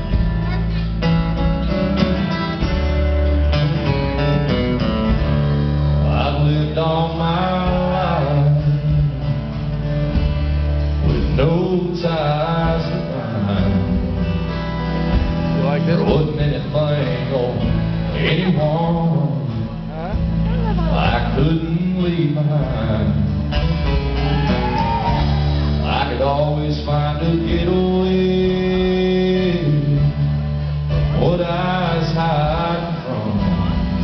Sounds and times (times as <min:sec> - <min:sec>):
Music: 0:00.0 - 0:34.0
Speech: 0:15.6 - 0:16.4, 0:19.7 - 0:21.4.